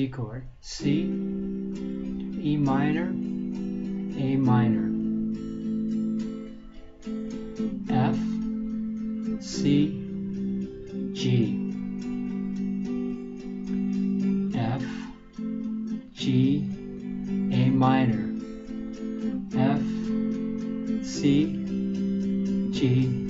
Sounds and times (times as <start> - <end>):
Speech: 0.0 - 1.2, 2.3 - 3.2, 4.2 - 5.0, 7.8 - 8.4, 9.4 - 10.1, 11.2 - 11.7, 14.6 - 15.2, 16.2 - 16.8, 17.5 - 18.4, 19.5 - 20.1, 21.1 - 21.6, 22.8 - 23.2
Strum: 0.8 - 23.2.